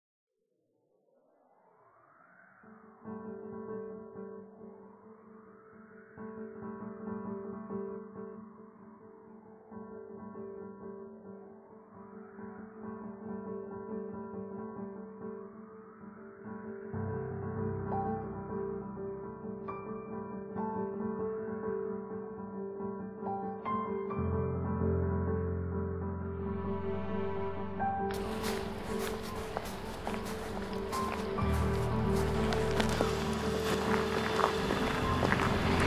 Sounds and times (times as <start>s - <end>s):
Music: 2.7s - 35.8s.